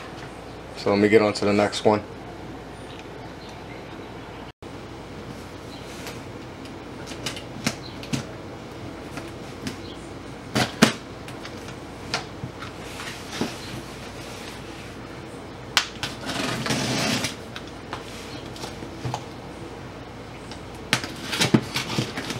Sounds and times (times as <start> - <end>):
Speech: 0.8 - 2.1.